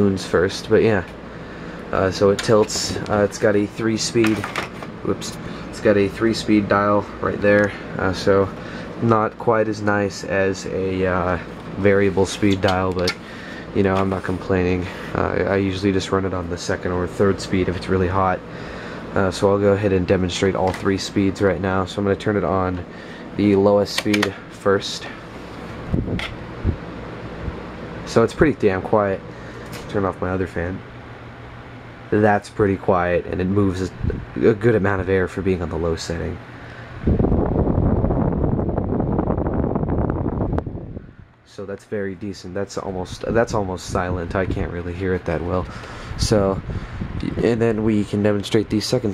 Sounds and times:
Wind noise (microphone): 25.9 - 27.6, 33.9 - 34.4, 37.0 - 41.3, 46.1 - 47.5.

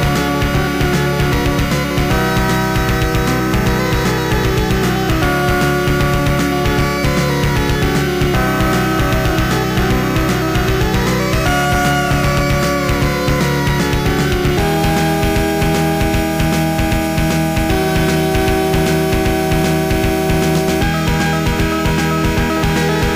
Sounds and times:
Soundtrack music: 0.0 - 23.1.

